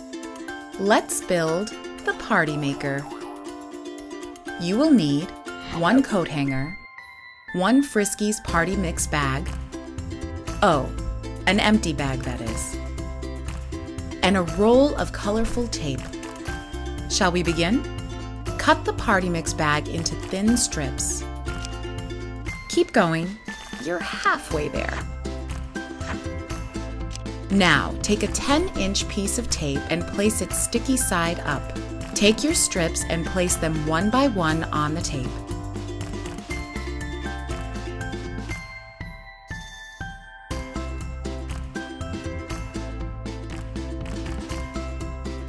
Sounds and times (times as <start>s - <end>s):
Music: 0.0s - 45.4s
Speech: 0.8s - 3.0s, 4.6s - 6.8s, 7.6s - 9.5s, 10.6s - 10.9s, 11.5s - 12.8s, 14.2s - 16.0s, 17.1s - 17.8s, 18.6s - 21.2s, 22.7s - 25.0s, 27.5s - 35.4s.